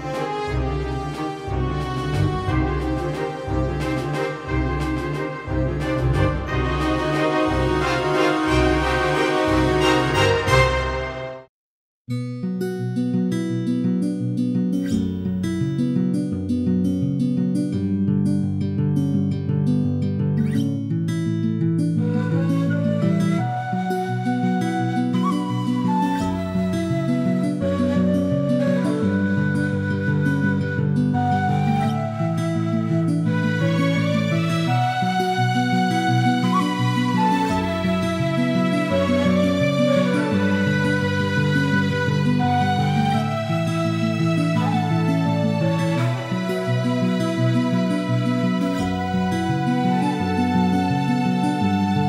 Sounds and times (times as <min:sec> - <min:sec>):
Music: 0:00.0 - 0:11.5, 0:12.1 - 0:52.0.